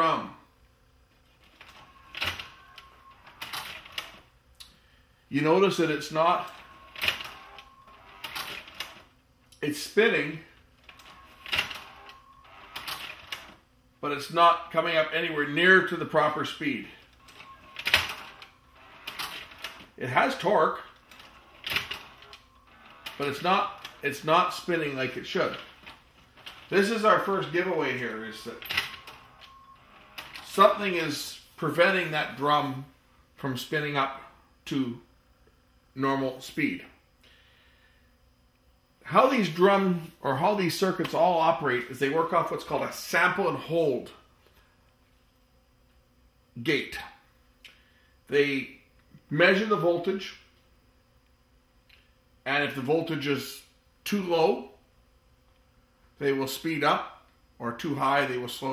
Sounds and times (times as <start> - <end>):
Speech: 0.0 - 0.4, 5.3 - 6.6, 9.6 - 10.5, 14.0 - 17.0, 20.0 - 20.9, 23.2 - 25.7, 26.7 - 28.6, 30.5 - 35.0, 36.0 - 37.0, 39.0 - 44.2, 46.6 - 47.2, 48.3 - 50.4, 52.4 - 54.8, 56.2 - 58.7
Inside, small room: 0.0 - 58.7
Typewriter: 1.6 - 4.2, 6.5 - 9.0, 10.9 - 13.6, 17.3 - 19.9, 21.1 - 24.0, 28.4 - 30.6.